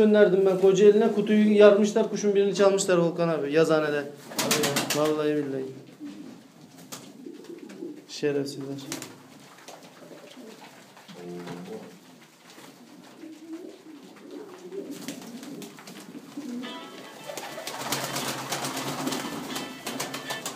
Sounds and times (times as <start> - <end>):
Speech: 0.0 - 5.8, 8.1 - 9.0, 11.1 - 11.9
Pigeon, dove: 8.8 - 20.5
Music: 16.6 - 20.5.